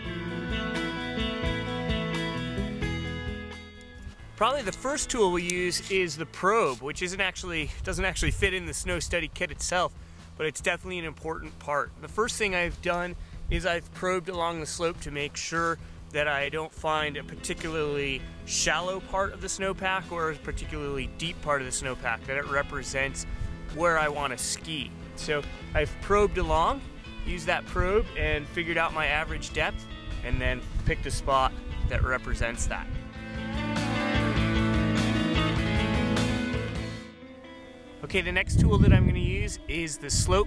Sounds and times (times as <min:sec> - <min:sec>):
Speech: 0:04.4 - 0:32.9, 0:38.0 - 0:40.4.